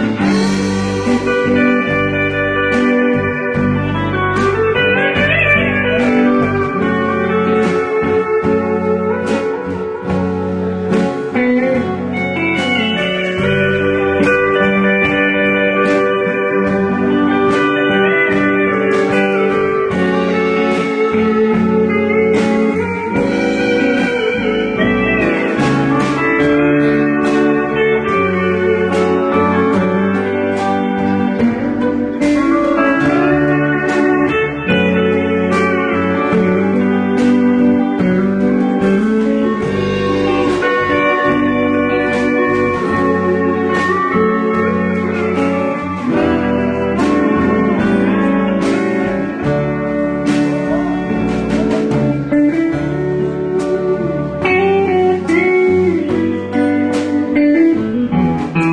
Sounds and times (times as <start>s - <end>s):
Country: 0.0s - 58.7s
Steel guitar, slide guitar: 0.0s - 58.7s
Percussion: 10.9s - 36.6s.